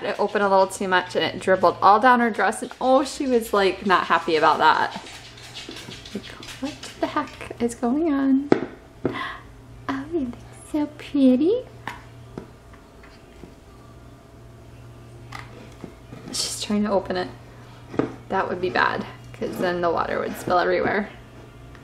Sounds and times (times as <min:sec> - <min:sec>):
Speech: 0:00.0 - 0:05.0, 0:06.2 - 0:08.5, 0:09.9 - 0:11.7, 0:16.3 - 0:17.4, 0:18.3 - 0:21.2.